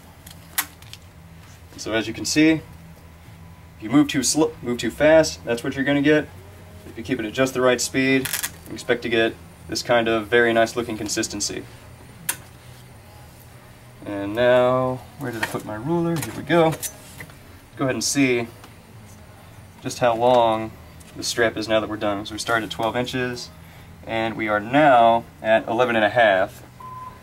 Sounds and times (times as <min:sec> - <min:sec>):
Speech: 0:03.8 - 0:06.3, 0:14.0 - 0:16.8, 0:17.8 - 0:18.5, 0:19.8 - 0:23.5, 0:24.1 - 0:26.6.